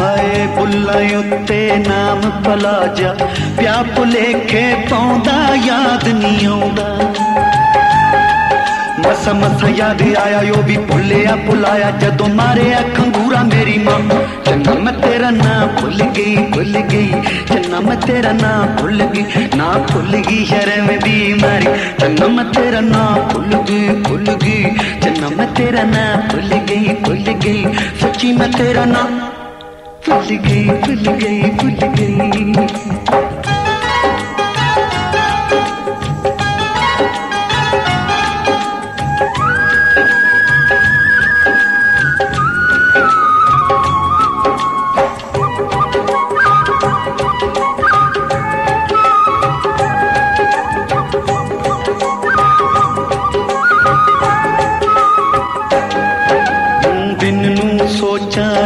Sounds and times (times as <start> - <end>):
Music of Bollywood: 0.0 - 58.6
Singing: 8.9 - 29.4, 56.7 - 58.6.